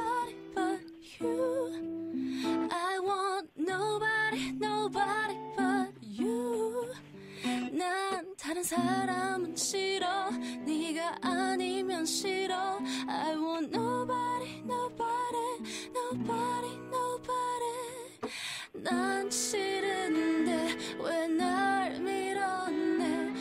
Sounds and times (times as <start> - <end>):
Music: 0.0 - 2.8, 3.8 - 23.4.